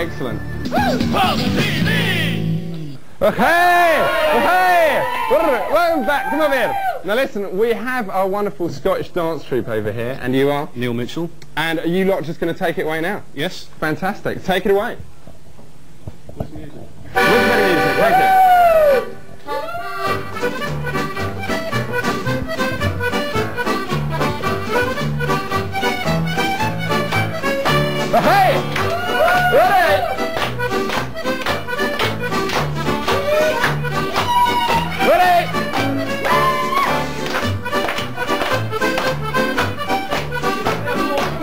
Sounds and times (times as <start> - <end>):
Music: 0.0 - 3.0, 17.2 - 41.4
Speech: 3.2 - 15.0.